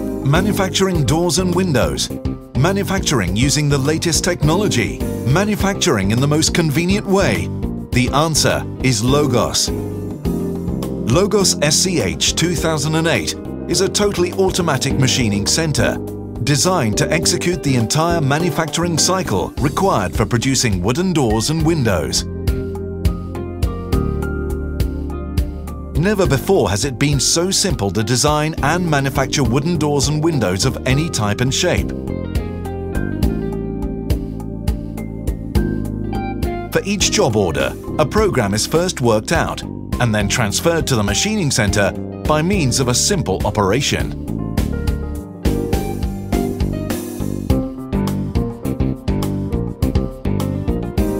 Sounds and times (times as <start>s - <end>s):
Music: 0.0s - 51.1s
Speech: 0.2s - 9.8s, 11.1s - 22.3s, 26.0s - 31.9s, 36.7s - 44.2s.